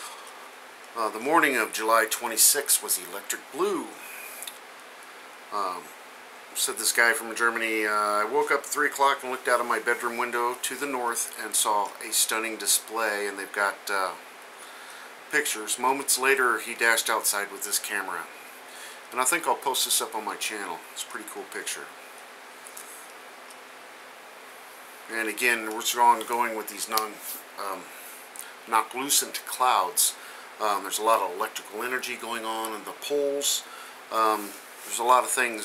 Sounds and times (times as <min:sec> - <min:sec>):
Speech: 0:01.0 - 0:04.1, 0:05.5 - 0:05.9, 0:06.6 - 0:14.2, 0:15.3 - 0:18.3, 0:19.1 - 0:22.0, 0:25.1 - 0:27.9, 0:28.7 - 0:35.6.